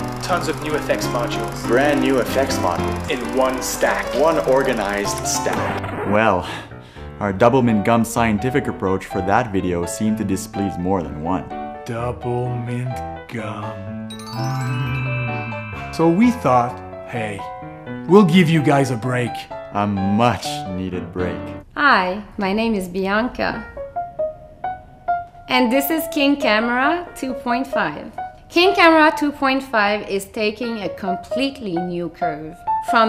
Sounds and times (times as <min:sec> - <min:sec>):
Music: 0:00.0 - 0:33.0
Speech: 0:00.2 - 0:06.6, 0:07.2 - 0:13.8.